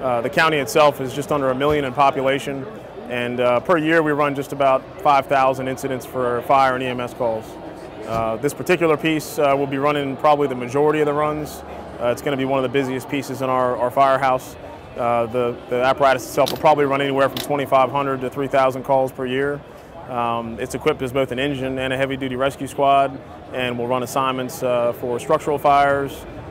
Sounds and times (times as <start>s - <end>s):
Speech: 0.0s - 26.3s.